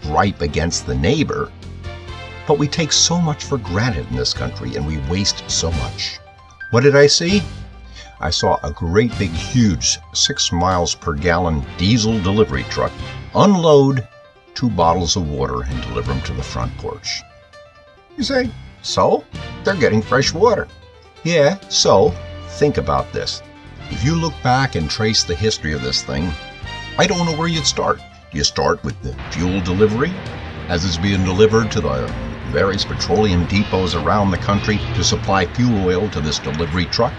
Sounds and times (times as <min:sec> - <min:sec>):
Speech: 0:00.0 - 0:01.5, 0:02.4 - 0:17.2, 0:18.2 - 0:20.7, 0:21.3 - 0:26.4, 0:27.0 - 0:37.1
Music: 0:00.0 - 0:37.1.